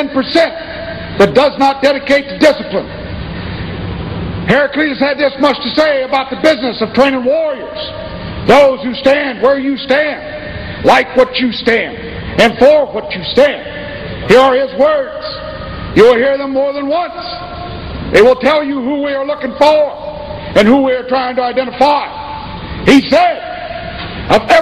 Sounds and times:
Male speech, man speaking: 0.0s - 3.0s, 4.5s - 17.5s, 18.1s - 22.2s, 22.9s - 23.6s, 24.3s - 24.6s
Narration, monologue: 0.0s - 24.6s.

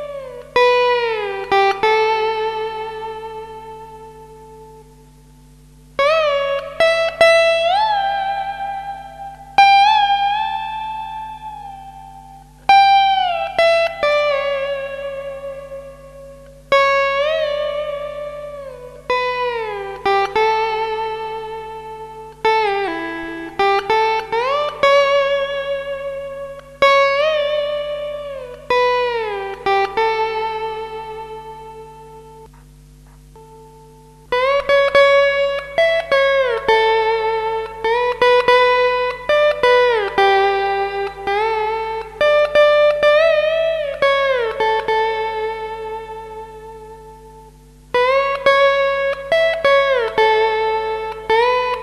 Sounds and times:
Guitar: 0.0s - 51.8s.

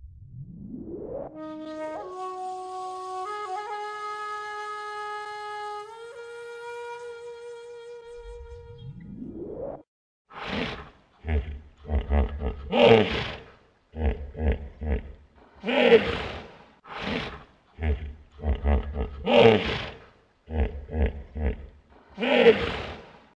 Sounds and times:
Roar: 10.4s - 23.1s.

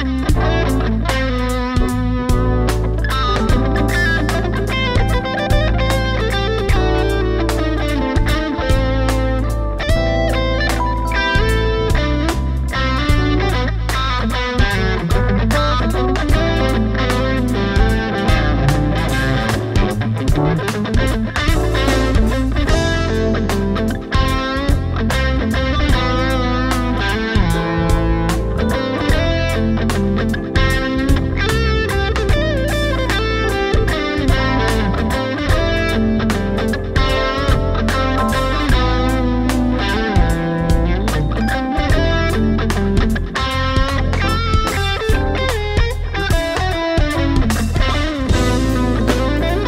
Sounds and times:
Electric guitar: 0.0s - 49.6s
Strum: 0.2s - 49.6s.

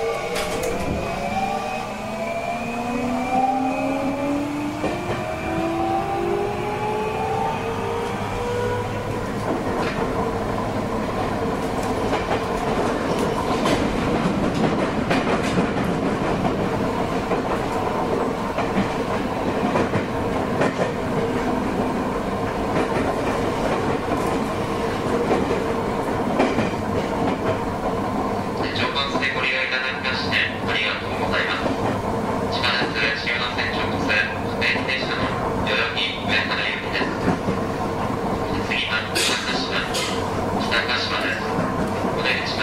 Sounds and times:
Subway, metro, underground: 0.0s - 42.6s
Train: 0.0s - 42.6s.

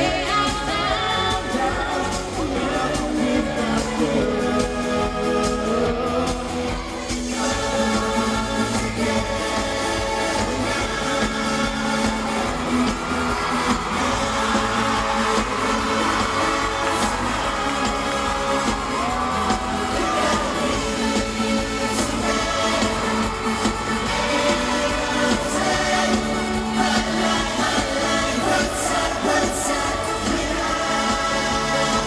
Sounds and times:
Music: 0.0s - 32.0s.

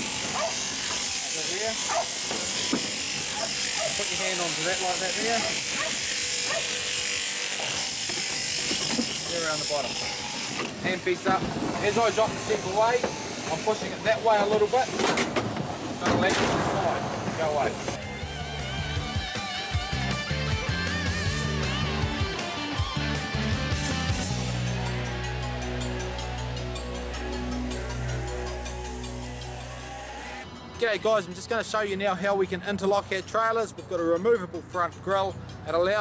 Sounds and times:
Electric shaver, electric razor: 0.0s - 10.8s, 11.8s - 14.9s, 18.3s - 30.5s
Outside, urban or manmade: 0.0s - 36.0s
Speech: 3.9s - 5.6s, 9.3s - 9.9s, 10.9s - 15.0s, 16.0s - 17.8s, 30.8s - 36.0s.

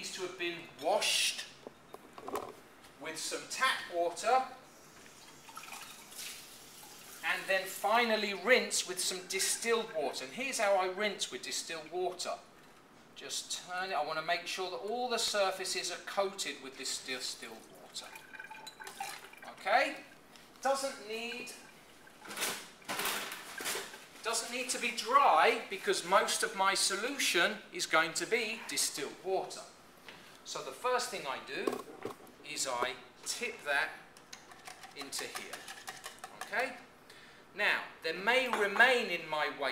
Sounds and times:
Speech: 0.0s - 1.5s, 3.0s - 4.6s, 7.2s - 12.5s, 13.2s - 18.2s, 19.5s - 21.6s, 24.2s - 29.8s, 30.5s - 31.8s, 32.4s - 34.0s, 35.0s - 35.6s, 36.4s - 36.9s, 37.6s - 39.7s
Water tap, faucet: 5.1s - 7.3s, 17.6s - 19.5s.

